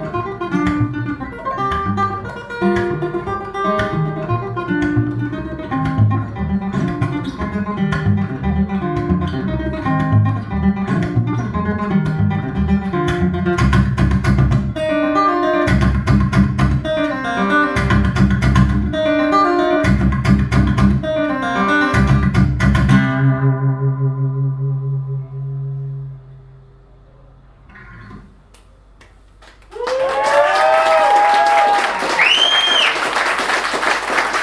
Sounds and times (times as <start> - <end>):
Strum: 0.0 - 29.0.